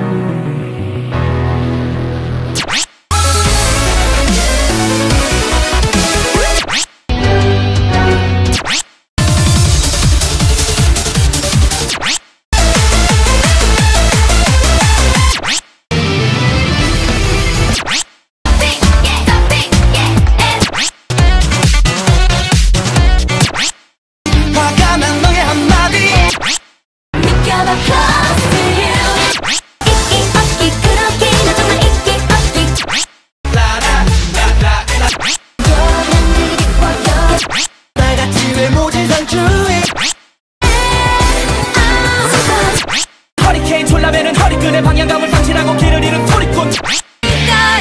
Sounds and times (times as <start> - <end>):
Music: 0.0 - 8.6, 9.2 - 12.0, 12.6 - 17.8, 18.5 - 23.6, 24.3 - 26.3, 27.2 - 32.8, 33.5 - 37.4, 38.0 - 39.9, 40.6 - 42.8, 43.4 - 47.8.